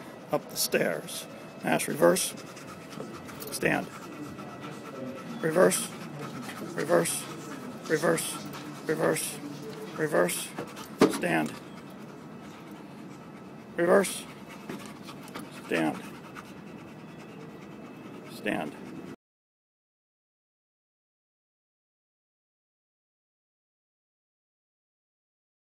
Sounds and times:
Speech: 3.4 - 11.6, 13.8 - 14.3, 15.7 - 16.0, 18.3 - 18.8.

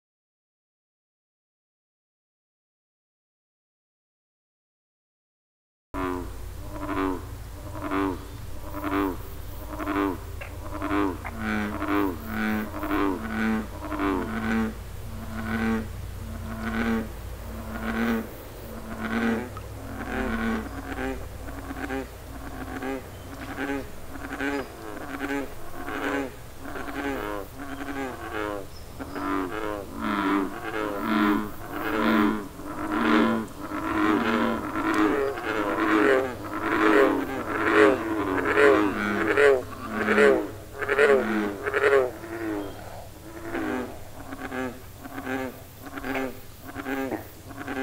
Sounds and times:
Frog: 6.0 - 47.8.

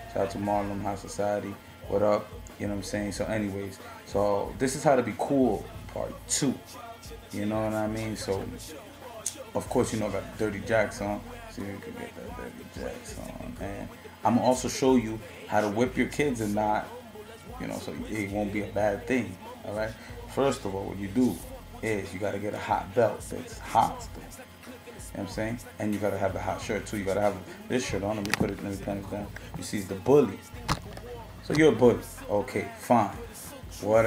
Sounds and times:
Music: 0.0 - 34.0
Speech: 0.1 - 6.6, 7.3 - 8.6, 9.6 - 24.3, 25.1 - 30.5, 31.1 - 34.0.

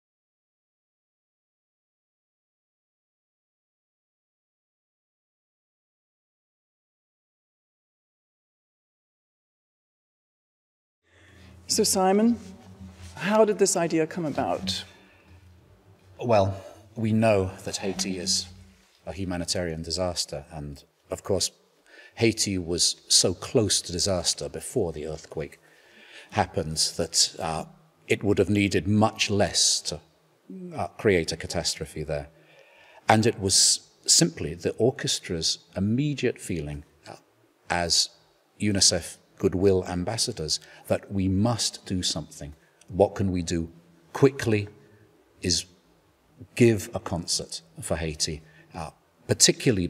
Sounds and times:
Speech: 11.7 - 15.0, 16.2 - 21.6, 22.2 - 25.6, 26.4 - 32.3, 33.1 - 44.8, 45.4 - 45.7, 46.4 - 49.9.

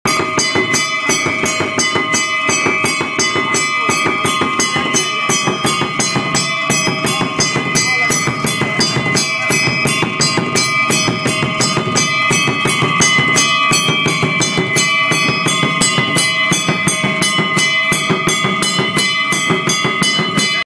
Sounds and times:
Bass drum: 0.1 - 20.6.

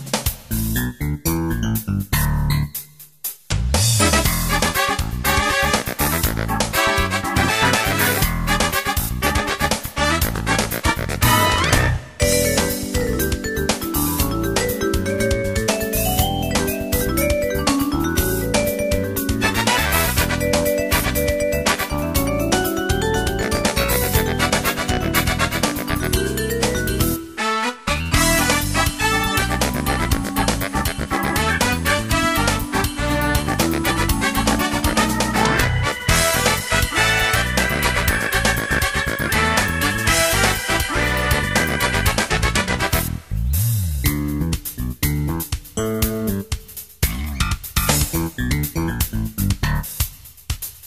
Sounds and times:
Music: 0.0 - 50.8.

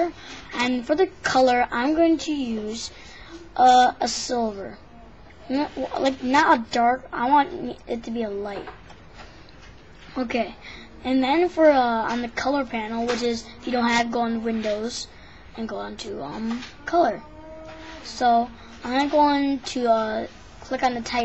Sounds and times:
Speech: 0.0 - 8.7, 10.2 - 21.2.

